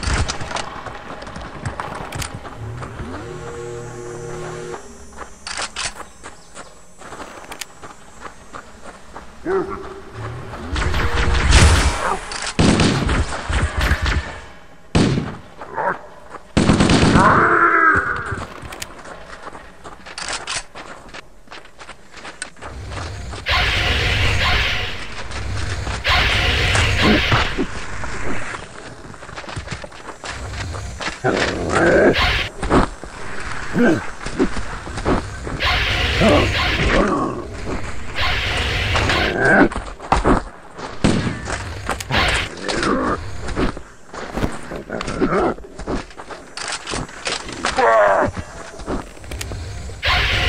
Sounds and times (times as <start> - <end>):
Outside, rural or natural: 0.0 - 50.4.